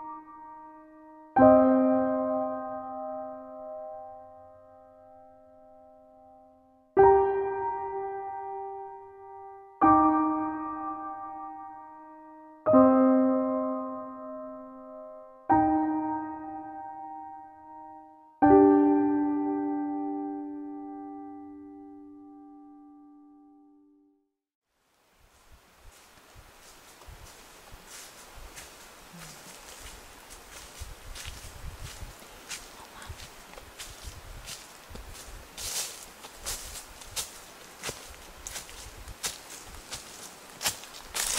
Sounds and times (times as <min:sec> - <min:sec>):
Music: 0:00.0 - 0:24.3.